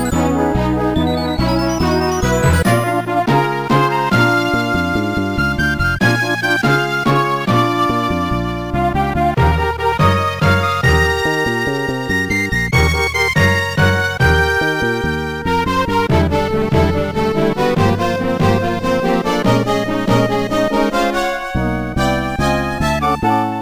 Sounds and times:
Music: 0.0 - 23.6.

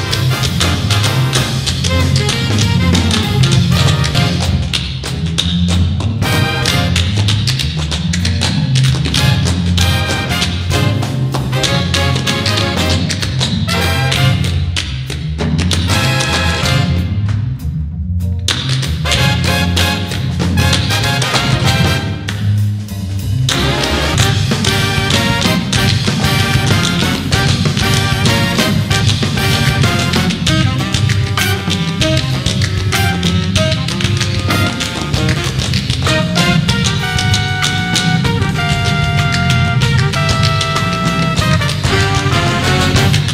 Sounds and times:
Music: 0.0 - 43.3.

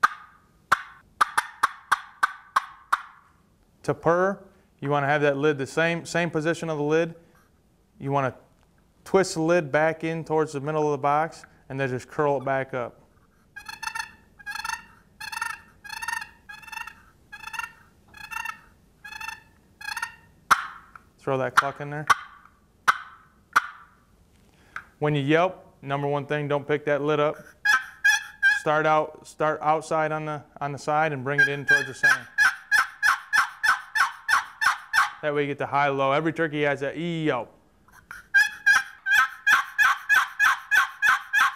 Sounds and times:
Speech: 3.8 - 7.2, 8.0 - 8.4, 9.1 - 13.0, 21.2 - 22.1, 25.0 - 27.4, 28.6 - 32.3, 35.2 - 37.5.

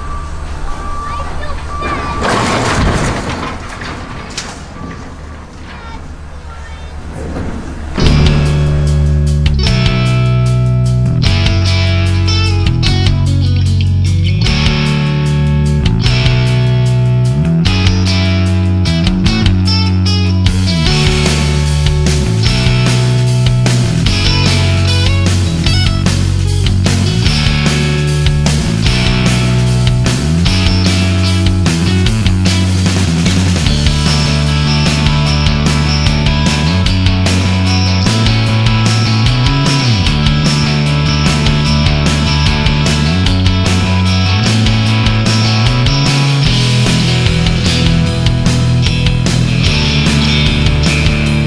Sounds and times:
Music: 8.0 - 51.4.

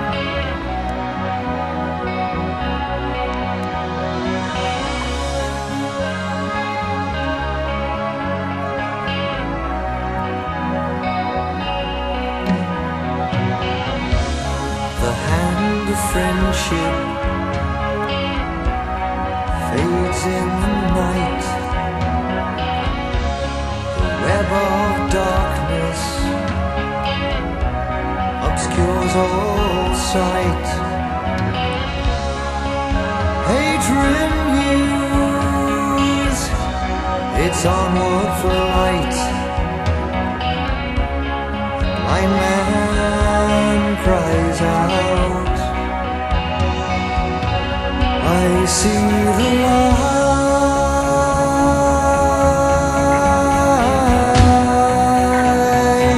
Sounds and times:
Independent music: 0.0 - 56.1.

